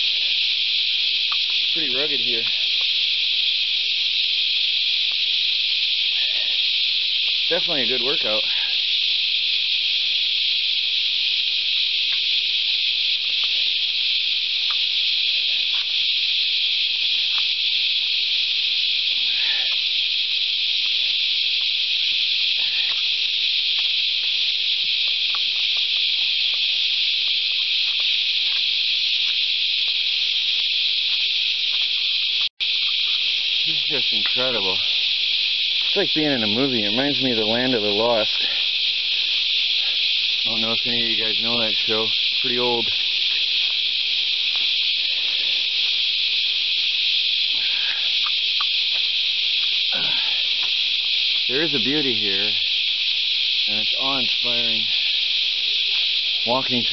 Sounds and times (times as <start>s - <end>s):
Outside, rural or natural: 0.0s - 56.9s
Speech: 1.7s - 2.6s, 7.5s - 8.6s, 33.7s - 34.9s, 35.9s - 38.5s, 40.5s - 43.0s, 51.5s - 52.6s, 53.7s - 54.9s, 56.5s - 56.9s.